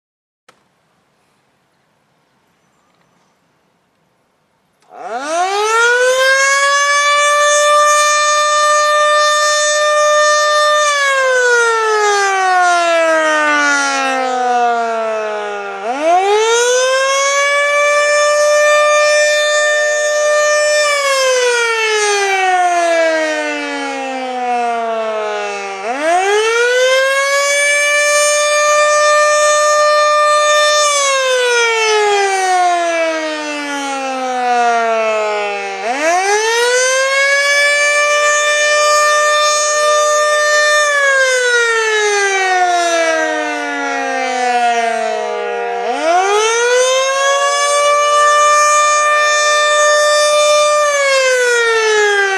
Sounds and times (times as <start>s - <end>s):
Civil defense siren: 4.8s - 52.3s.